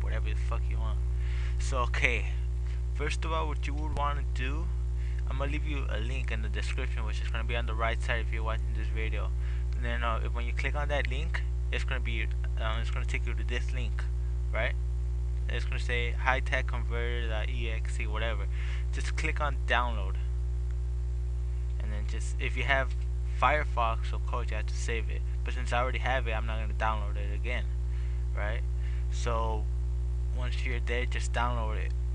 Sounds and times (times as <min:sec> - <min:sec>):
Speech: 0:00.0 - 0:01.0, 0:01.6 - 0:14.8, 0:15.5 - 0:20.3, 0:21.8 - 0:29.7, 0:30.3 - 0:31.9.